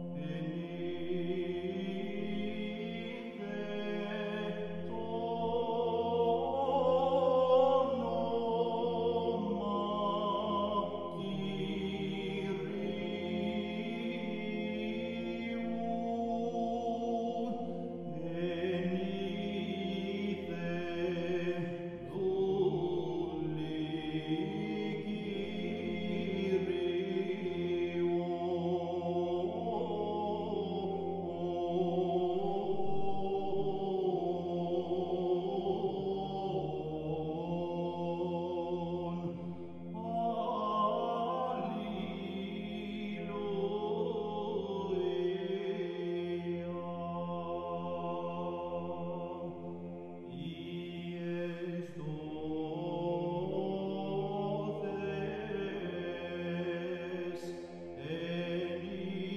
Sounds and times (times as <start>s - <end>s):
Mantra: 0.0s - 59.3s.